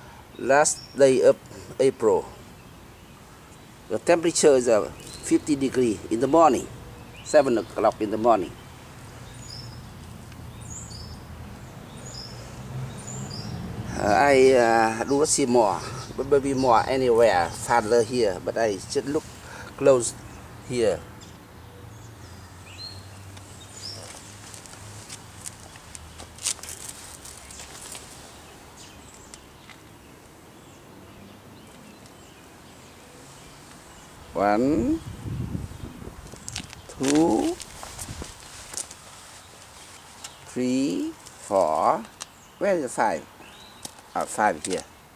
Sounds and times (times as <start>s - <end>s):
Outside, rural or natural: 0.0s - 45.1s.